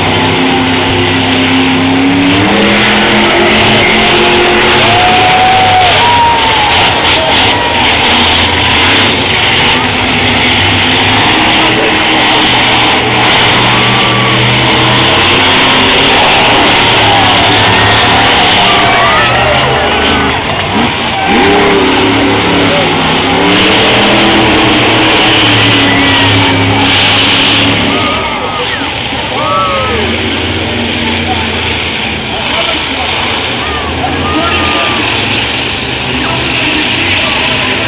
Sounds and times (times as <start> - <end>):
Car: 0.0 - 37.8.